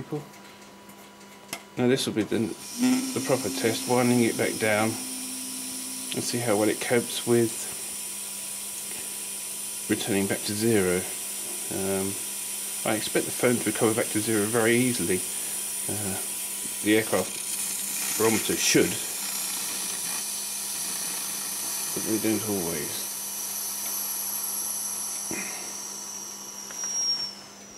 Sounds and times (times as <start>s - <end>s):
Speech: 0.0s - 0.3s, 1.8s - 5.0s, 6.2s - 7.7s, 9.9s - 11.1s, 11.7s - 12.2s, 12.8s - 15.3s, 15.9s - 17.3s, 18.2s - 19.1s, 22.0s - 23.1s.